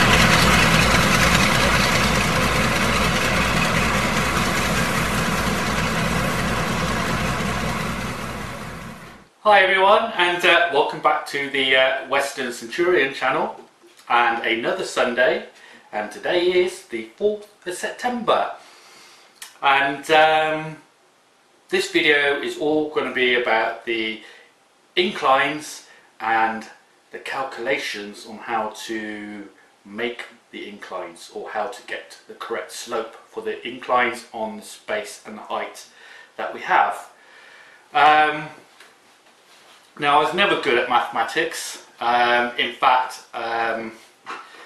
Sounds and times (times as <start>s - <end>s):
Speech: 9.4s - 18.6s, 19.4s - 20.9s, 21.7s - 24.3s, 25.0s - 37.2s, 38.0s - 38.6s, 40.0s - 44.0s.